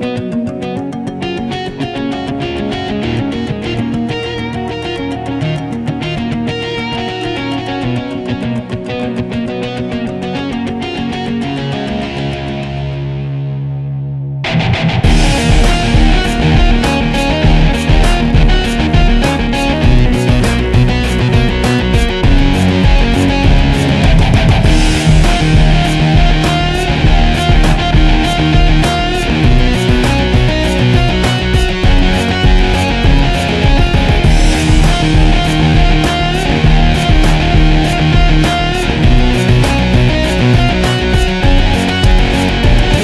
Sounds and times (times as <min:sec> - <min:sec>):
Music: 0:00.0 - 0:43.0.